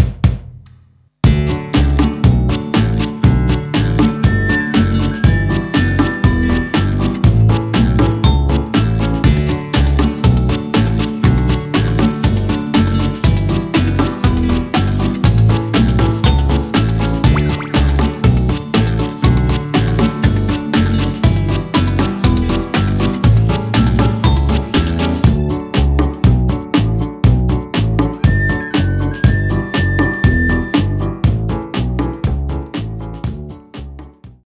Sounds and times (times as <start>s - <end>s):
Music: 0.0s - 34.4s.